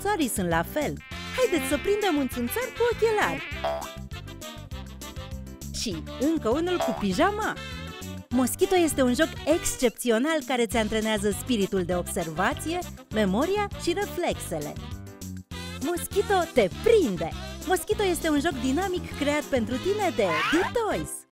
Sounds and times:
Speech: 0.0s - 3.4s, 5.8s - 7.6s, 8.3s - 14.8s, 15.8s - 21.3s
Music: 0.0s - 21.3s.

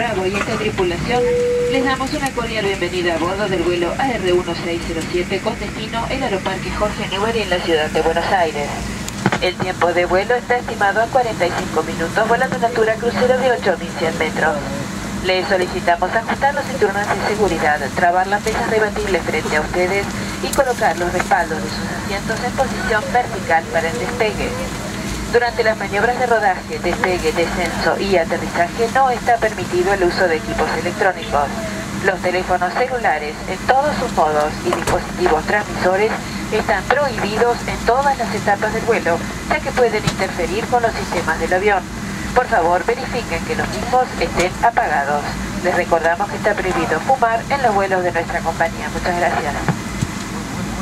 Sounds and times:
Female speech, woman speaking: 0.0s - 49.8s
Narration, monologue: 0.0s - 50.1s.

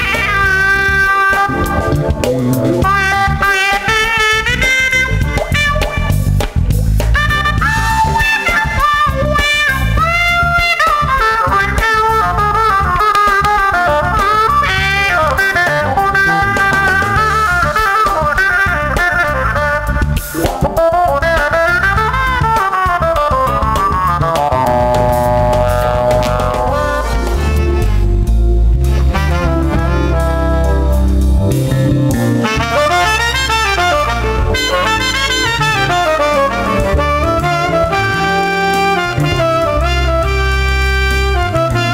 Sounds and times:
Brass instrument: 0.0s - 41.9s
Saxophone: 0.0s - 41.9s.

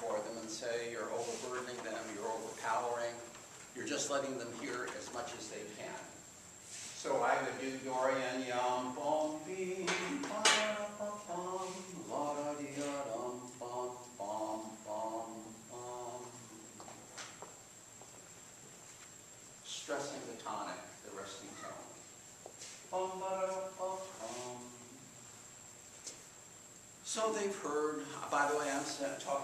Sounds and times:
Speech: 0.0s - 6.2s, 7.0s - 8.6s, 19.7s - 22.0s, 27.1s - 29.4s.

